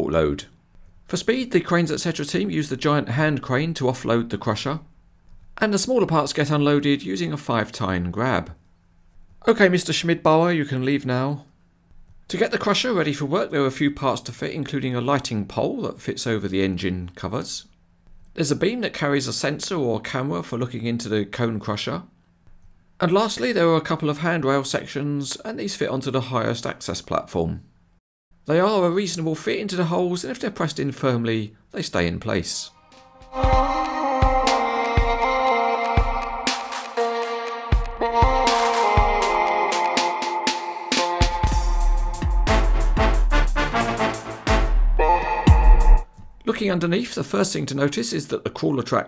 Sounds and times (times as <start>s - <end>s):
Speech: 0.0s - 4.9s, 5.6s - 8.6s, 9.4s - 11.5s, 12.3s - 17.8s, 18.4s - 22.2s, 23.0s - 27.7s, 28.5s - 32.8s, 46.4s - 49.0s.